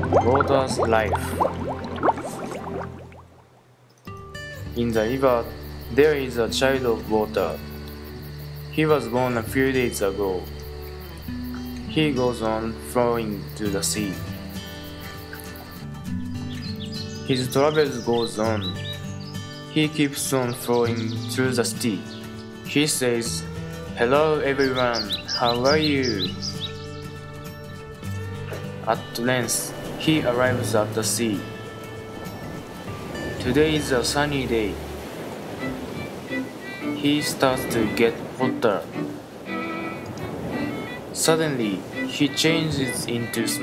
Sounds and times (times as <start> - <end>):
Music: 0.0 - 3.3, 4.0 - 43.6
Speech: 0.2 - 1.4, 4.8 - 7.6, 8.8 - 10.4, 11.9 - 14.2, 17.3 - 18.8, 19.8 - 22.0, 22.7 - 23.4, 24.0 - 26.3, 28.9 - 31.5, 33.4 - 34.8, 37.0 - 38.9, 41.2 - 43.6.